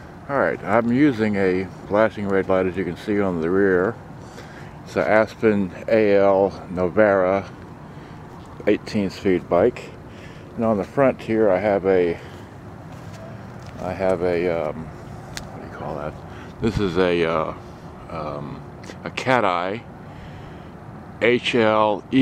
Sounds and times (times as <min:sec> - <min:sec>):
Speech: 0:00.3 - 0:04.0, 0:04.9 - 0:07.6, 0:08.6 - 0:10.0, 0:10.6 - 0:12.3, 0:13.8 - 0:14.9, 0:15.5 - 0:19.9, 0:21.2 - 0:22.2.